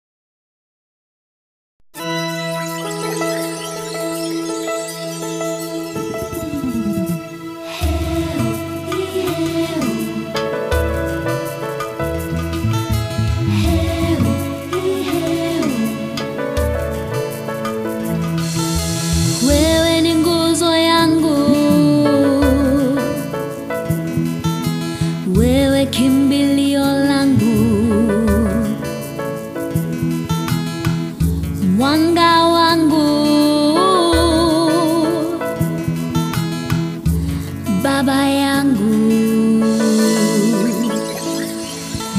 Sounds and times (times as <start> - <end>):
Music: 2.0 - 42.1.